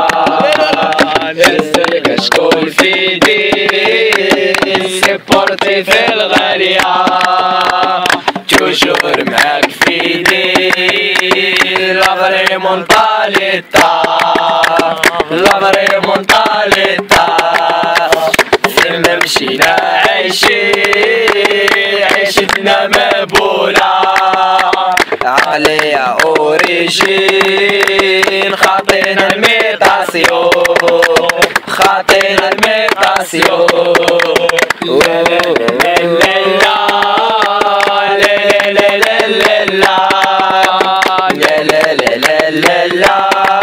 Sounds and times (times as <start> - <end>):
Music: 0.0 - 43.6.